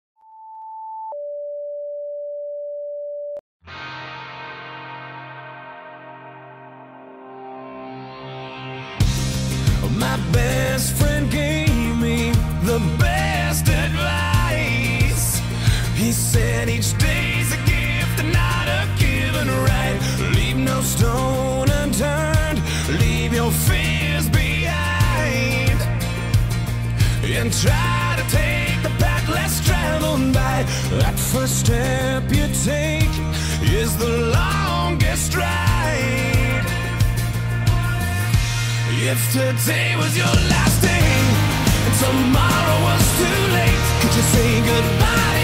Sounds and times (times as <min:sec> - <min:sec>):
Music: 0:03.6 - 0:45.4.